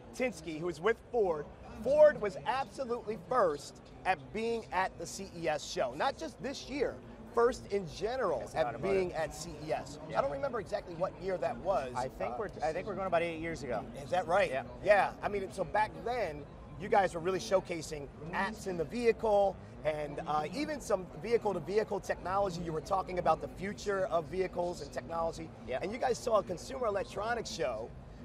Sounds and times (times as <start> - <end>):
Speech: 0.0 - 28.2.